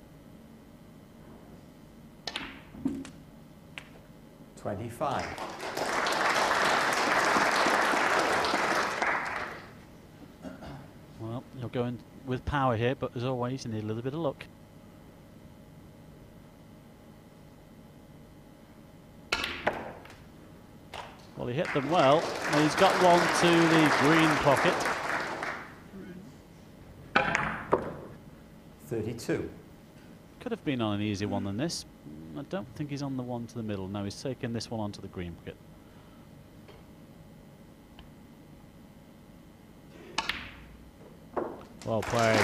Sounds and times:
Speech: 4.6s - 5.4s, 11.2s - 14.5s, 21.4s - 24.8s, 28.8s - 29.6s, 30.4s - 35.6s, 41.8s - 42.4s.

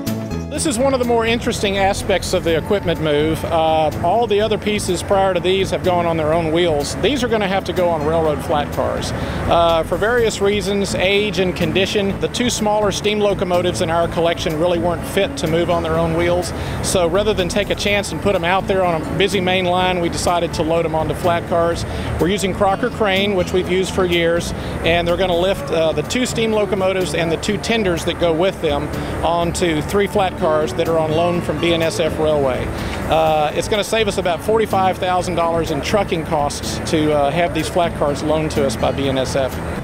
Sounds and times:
Heavy engine (low frequency): 0.0s - 39.8s
Music: 0.0s - 39.8s
Speech: 0.5s - 39.6s.

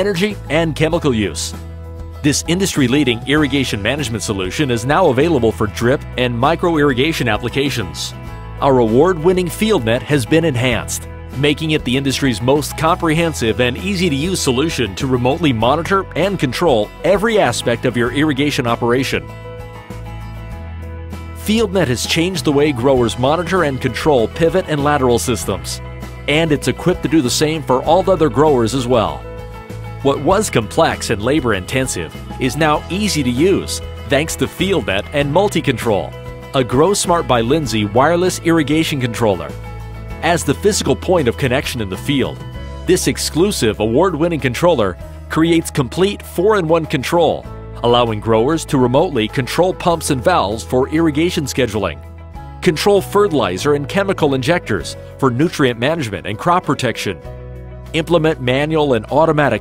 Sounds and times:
Speech: 0.0s - 1.6s, 2.2s - 19.3s, 21.4s - 29.2s, 30.0s - 39.6s, 40.2s - 52.0s, 52.6s - 57.2s, 57.9s - 59.6s
Music: 0.0s - 59.6s.

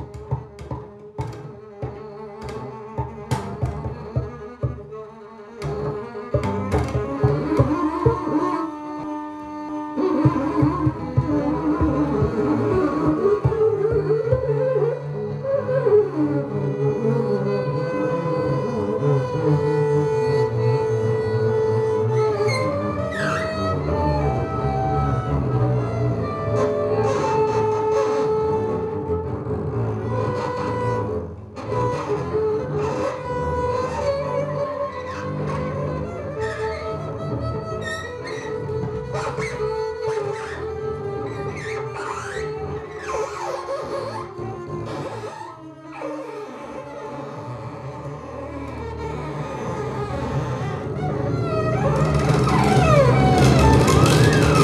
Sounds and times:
Carnatic music: 0.0s - 54.6s.

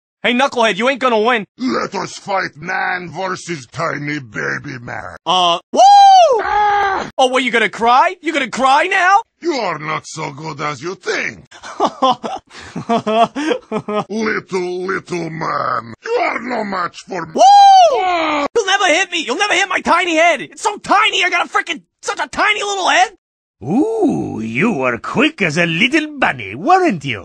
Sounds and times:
Speech: 0.2s - 5.6s, 7.2s - 11.5s, 14.1s - 27.2s.

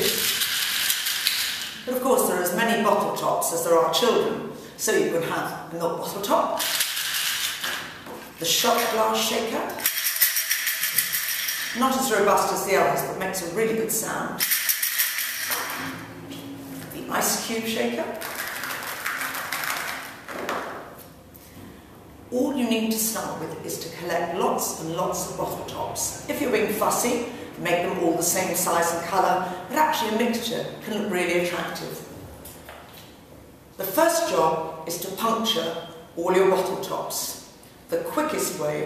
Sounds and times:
Speech: 1.9s - 6.6s, 8.4s - 9.9s, 11.8s - 14.4s, 16.9s - 18.2s, 22.3s - 32.1s, 33.8s - 38.8s.

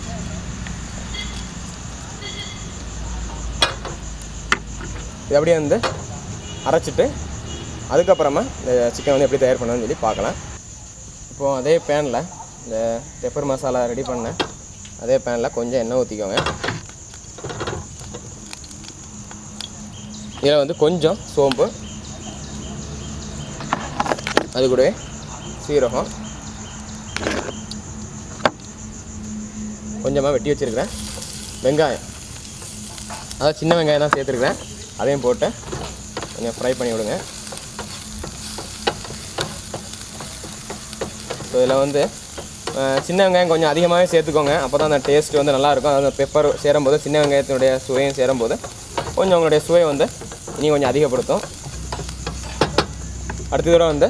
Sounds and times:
Frying (food): 0.0s - 54.1s.

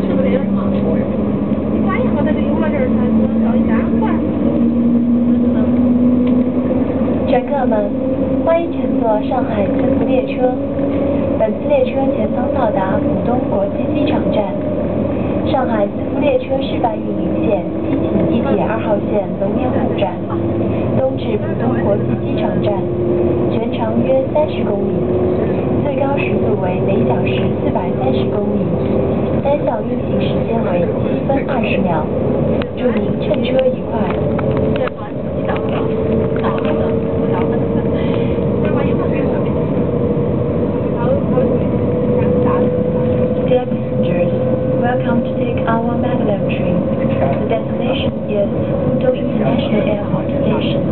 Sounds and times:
Speech: 0.0s - 1.2s, 1.8s - 4.6s, 7.3s - 10.6s, 11.4s - 14.7s, 15.5s - 22.9s, 23.5s - 28.8s, 29.4s - 39.6s, 41.0s - 42.8s, 43.4s - 50.9s
Vehicle: 0.0s - 50.9s.

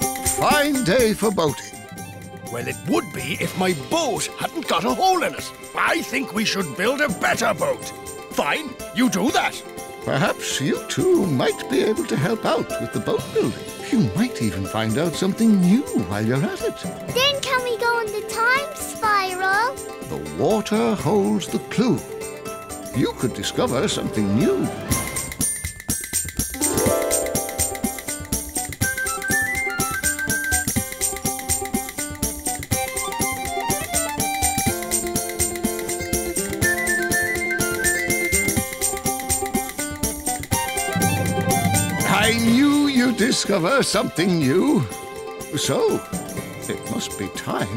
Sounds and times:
Music: 0.0s - 47.7s.

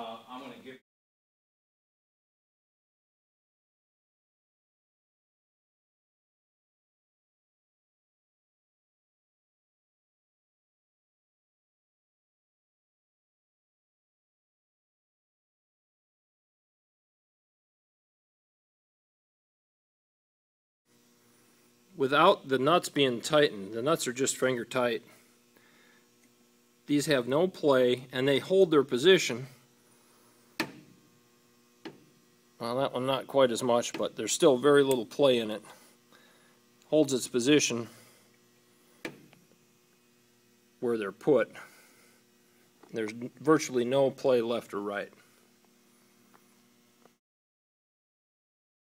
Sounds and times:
Speech: 0.0s - 0.8s, 22.0s - 25.2s, 26.9s - 29.6s, 32.6s - 35.8s, 36.9s - 38.0s, 40.8s - 41.7s, 42.9s - 45.2s.

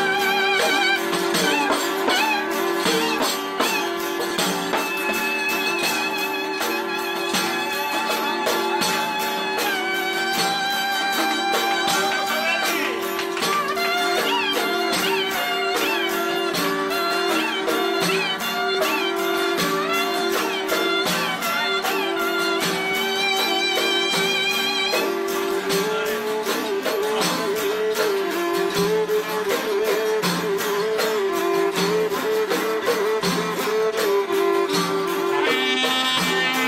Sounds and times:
Musical instrument: 0.0s - 36.6s.

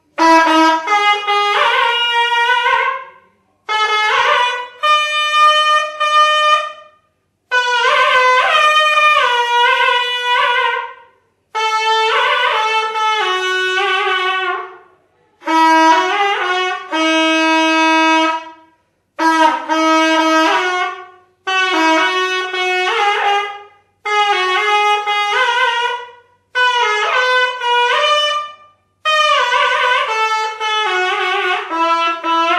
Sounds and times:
Wind instrument, woodwind instrument: 0.0s - 32.5s.

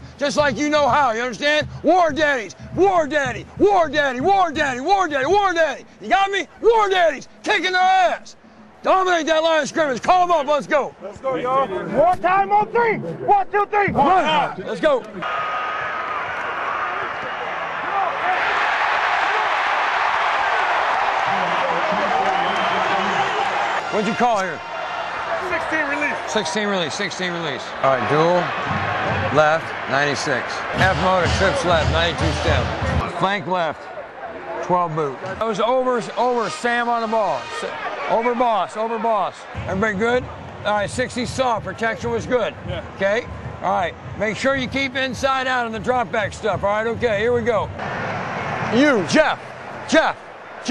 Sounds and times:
Music: 0.0s - 5.6s, 28.6s - 29.8s, 30.7s - 33.0s, 39.5s - 48.8s.

